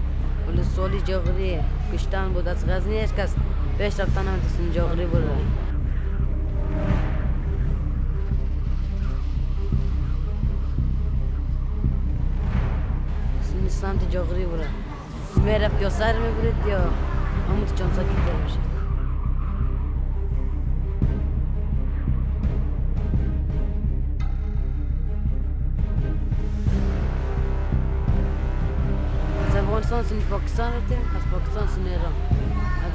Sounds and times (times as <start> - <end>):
Music: 0.0 - 32.9
Speech: 0.4 - 5.6, 13.4 - 18.8, 29.4 - 32.9.